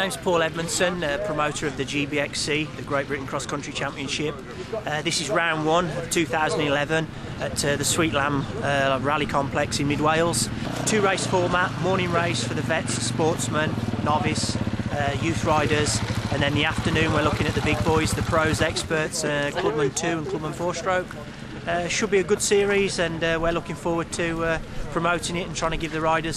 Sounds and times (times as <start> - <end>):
Speech: 0.0 - 26.3
Vehicle: 0.0 - 26.3.